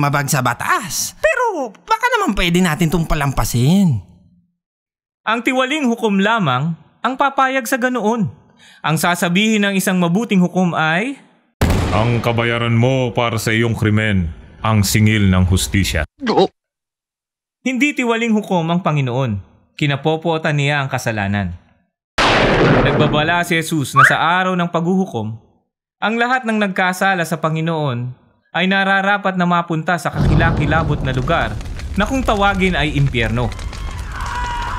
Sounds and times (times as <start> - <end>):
Speech: 0.0 - 4.1, 5.3 - 11.2, 11.9 - 16.5, 17.7 - 21.6, 22.8 - 25.4, 26.0 - 33.5.